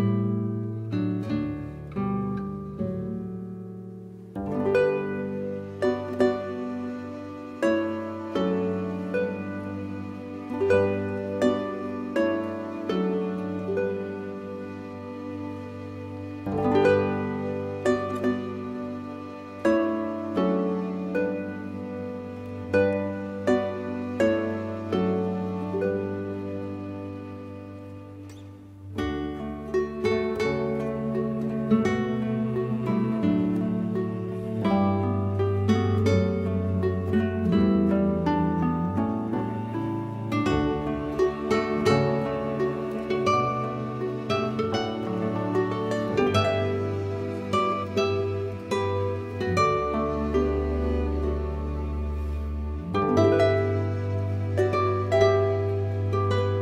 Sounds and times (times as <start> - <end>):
Plucked string instrument: 0.0 - 56.6.